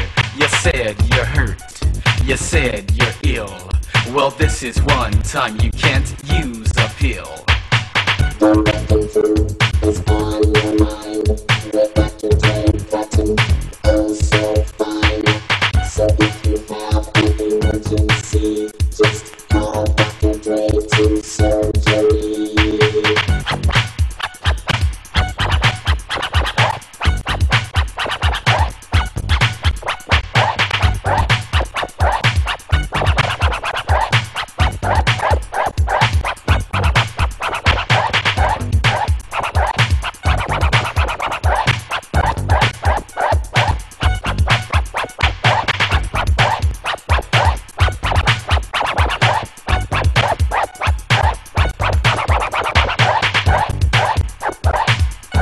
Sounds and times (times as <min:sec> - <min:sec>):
Scratching (performance technique): 0:00.0 - 0:55.4.